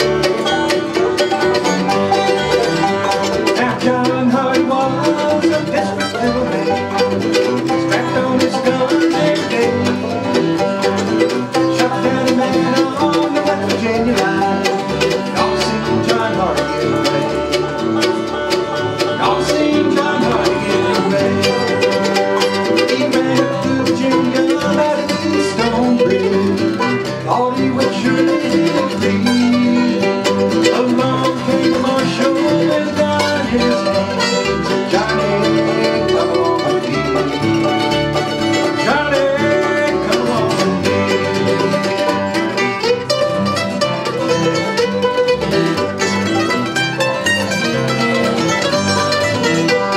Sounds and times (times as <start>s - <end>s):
Banjo: 0.0s - 49.9s
Bluegrass: 0.0s - 49.9s
Guitar: 0.0s - 49.9s
Violin, fiddle: 0.0s - 49.9s.